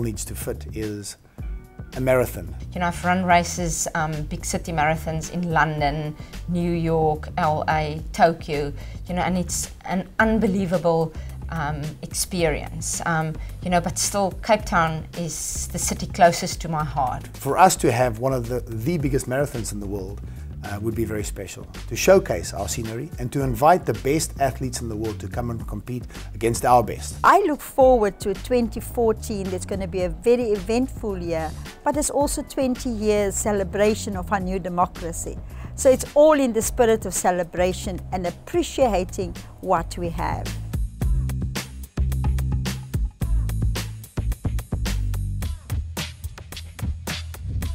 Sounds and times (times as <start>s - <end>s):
Speech: 0.0s - 1.2s, 2.0s - 40.5s
Music: 0.0s - 47.7s.